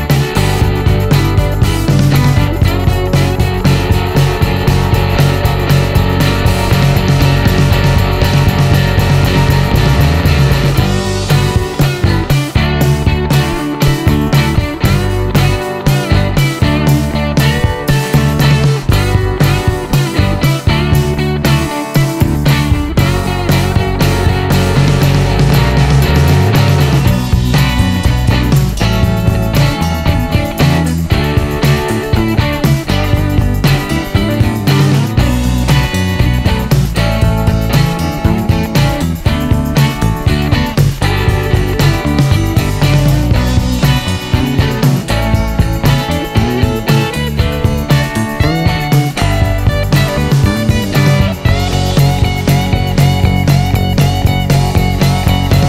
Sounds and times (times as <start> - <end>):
Music: 0.0 - 55.6.